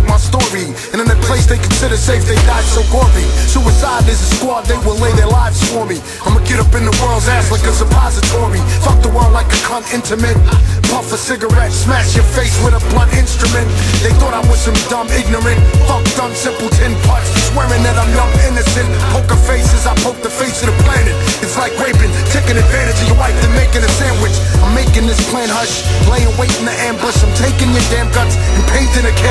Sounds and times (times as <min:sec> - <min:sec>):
Music: 0:00.0 - 0:29.3.